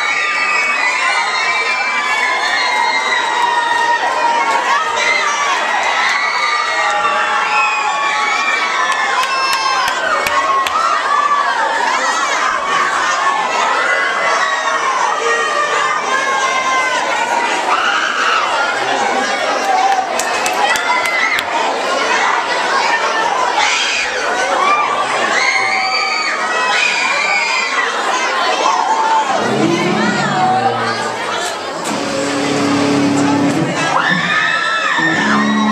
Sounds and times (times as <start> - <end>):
Speech: 8.4 - 35.7.